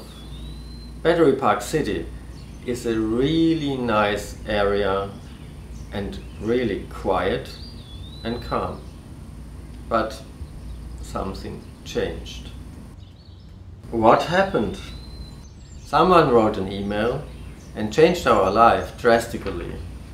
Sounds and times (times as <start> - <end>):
Speech: 1.0 - 5.2, 5.9 - 7.6, 8.2 - 8.9, 9.9 - 10.3, 11.0 - 12.6, 13.9 - 15.0, 15.9 - 19.9.